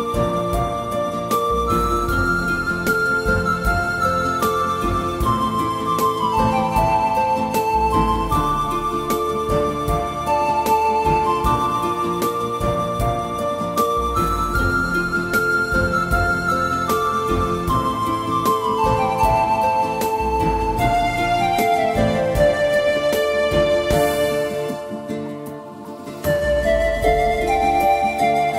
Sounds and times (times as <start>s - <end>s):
Music: 0.0s - 28.5s.